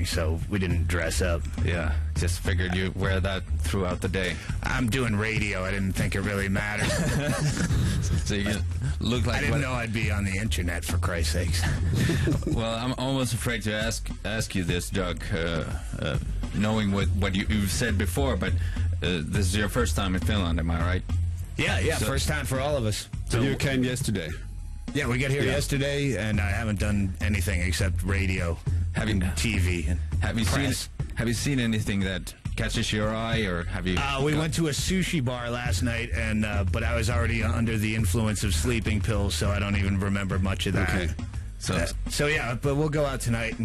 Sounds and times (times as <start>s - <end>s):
Speech: 0.0s - 7.3s, 8.1s - 11.8s, 12.4s - 43.6s
Music: 0.0s - 43.6s.